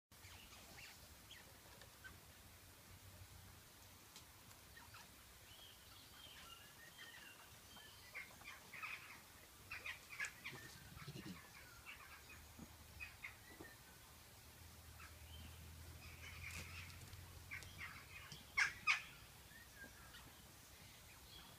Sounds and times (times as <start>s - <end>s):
Rodents, rats, mice: 6.4s - 12.4s.